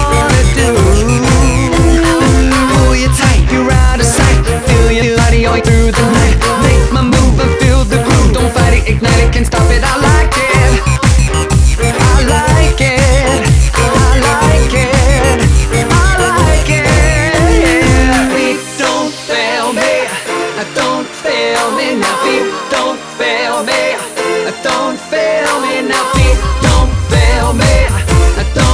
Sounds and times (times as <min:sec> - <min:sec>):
Soundtrack music: 0:00.0 - 0:28.7.